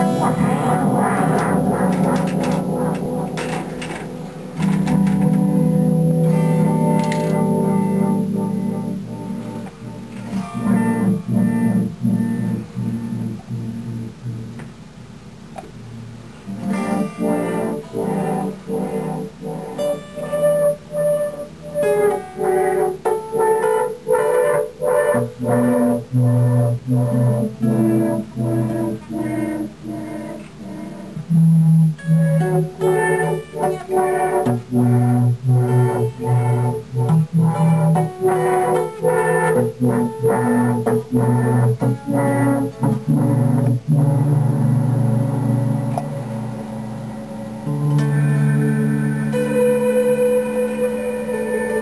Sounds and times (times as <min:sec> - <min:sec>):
Music: 0:00.0 - 0:51.8.